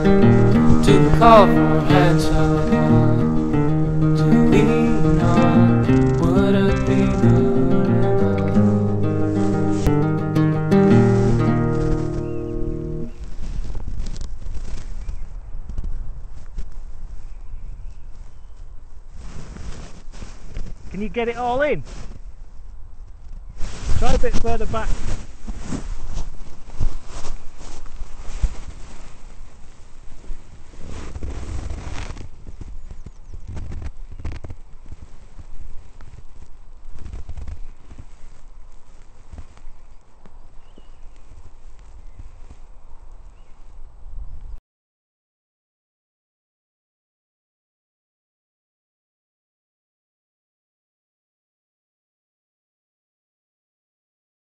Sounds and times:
Outside, rural or natural: 0:00.0 - 0:44.6.

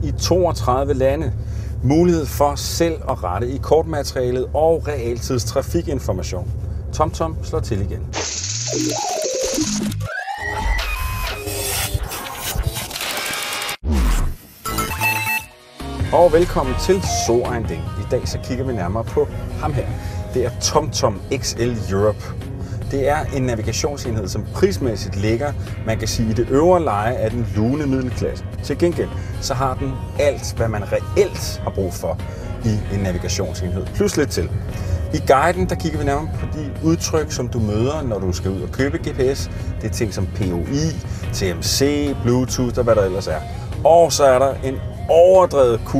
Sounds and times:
Speech: 0:00.0 - 0:08.1, 0:16.1 - 0:22.3, 0:22.9 - 0:34.5, 0:35.2 - 0:45.9
Music: 0:08.7 - 0:12.9, 0:14.6 - 0:45.9.

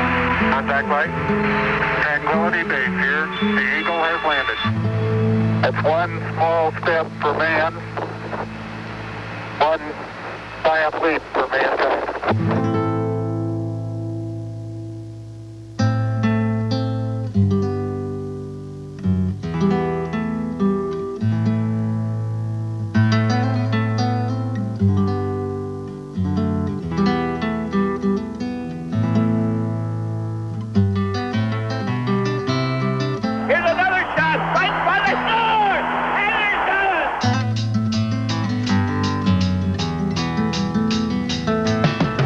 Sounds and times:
Acoustic guitar: 0:00.0 - 0:42.2.

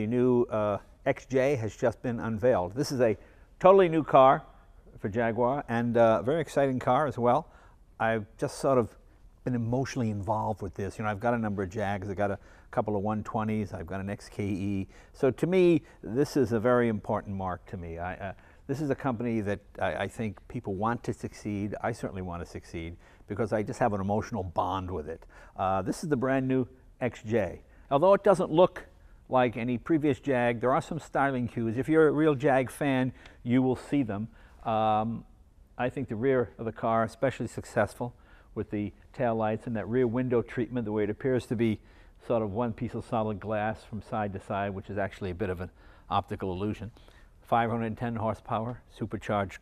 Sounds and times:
Speech: 0:00.0 - 0:49.6.

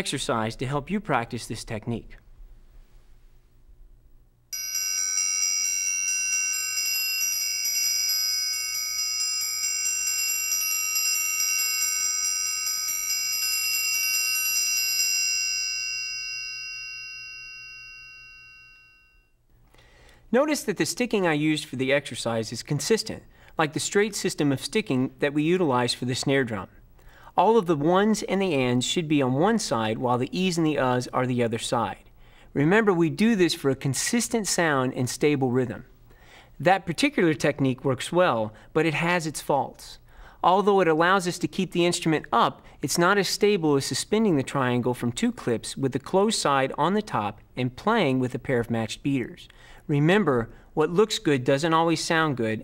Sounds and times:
Jingle, tinkle: 0:04.6 - 0:19.4.

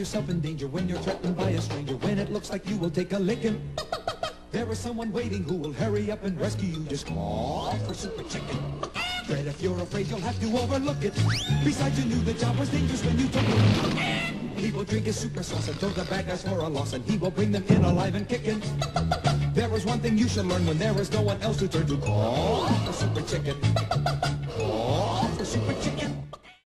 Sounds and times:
Music: 0:00.0 - 0:26.6.

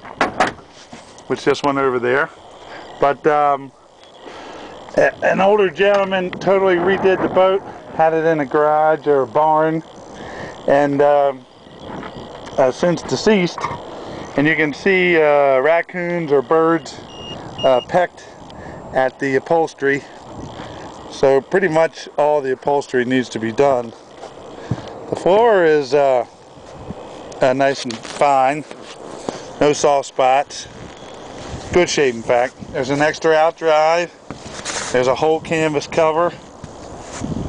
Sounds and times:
Speech: 0:01.3 - 0:02.3, 0:03.0 - 0:03.7, 0:05.0 - 0:09.9, 0:10.7 - 0:11.4, 0:12.6 - 0:13.6, 0:14.4 - 0:17.0, 0:17.6 - 0:18.2, 0:19.0 - 0:20.1, 0:21.1 - 0:24.0, 0:25.1 - 0:26.3, 0:27.4 - 0:28.7, 0:29.6 - 0:30.7, 0:31.7 - 0:34.2, 0:34.9 - 0:36.4.

